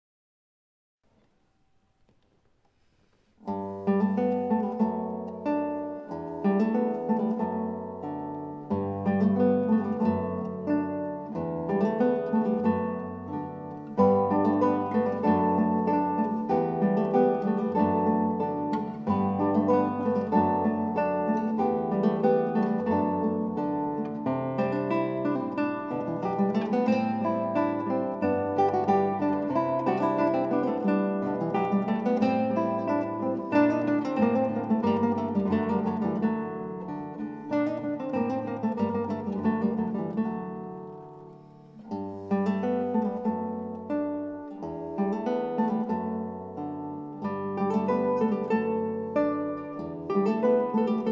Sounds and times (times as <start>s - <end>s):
Acoustic guitar: 1.1s - 51.1s
Strum: 1.1s - 51.1s.